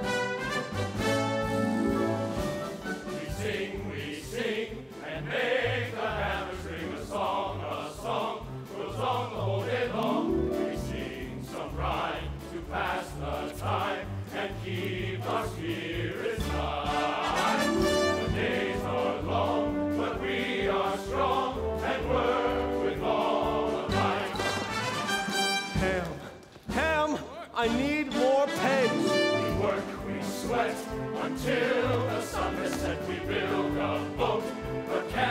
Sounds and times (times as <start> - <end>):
Music: 0.0 - 35.3
Speech: 25.8 - 29.1.